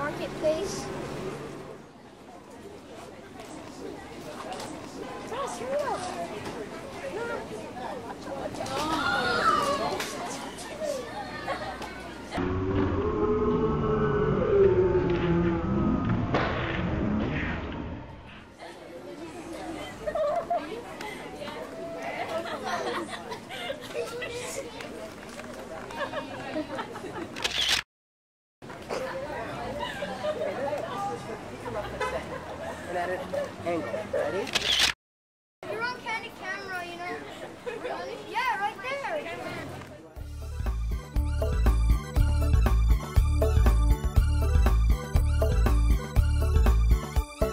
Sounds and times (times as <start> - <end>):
Single-lens reflex camera: 27.4 - 27.8, 34.4 - 35.0.